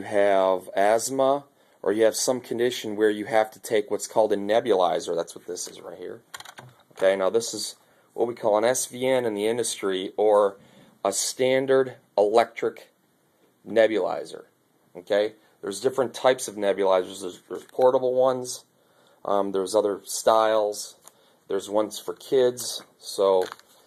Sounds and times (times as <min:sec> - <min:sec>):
Speech: 0:00.0 - 0:06.3, 0:07.0 - 0:13.0, 0:13.6 - 0:23.6.